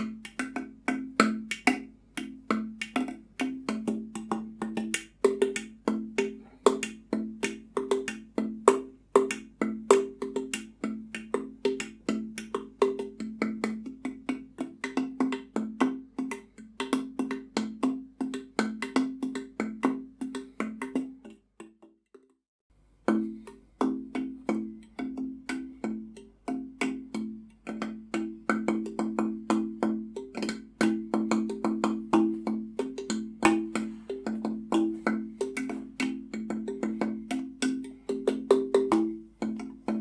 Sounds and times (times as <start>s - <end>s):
Music: 0.0s - 22.4s, 23.0s - 40.0s.